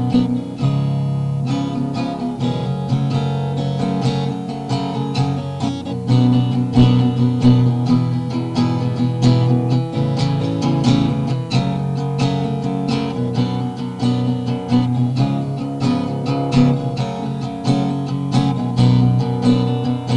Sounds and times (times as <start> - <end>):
Strum: 0.0 - 20.1.